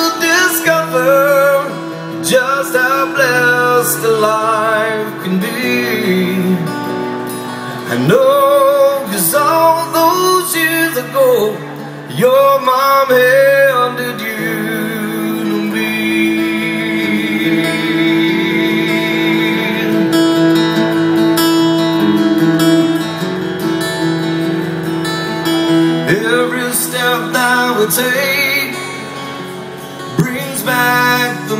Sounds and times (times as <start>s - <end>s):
Male singing: 0.0s - 6.7s, 7.9s - 20.2s, 26.1s - 31.5s
Music: 0.0s - 31.5s.